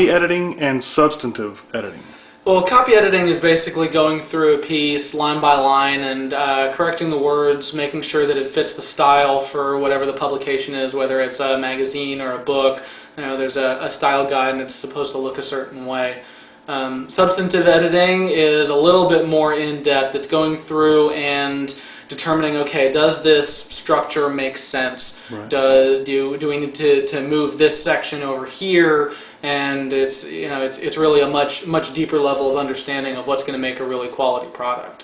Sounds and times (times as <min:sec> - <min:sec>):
Speech: 0:00.0 - 0:35.0.